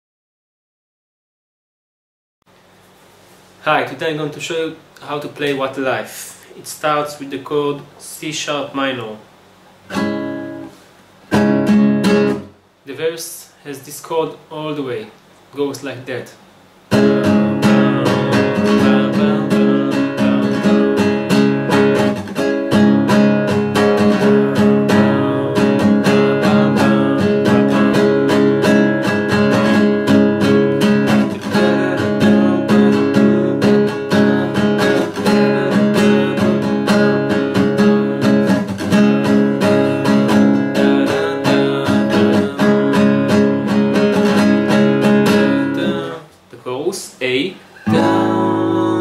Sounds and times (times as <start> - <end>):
Acoustic guitar: 9.8 - 12.6, 16.9 - 46.4, 47.3 - 49.0
Strum: 16.9 - 46.4, 47.7 - 49.0.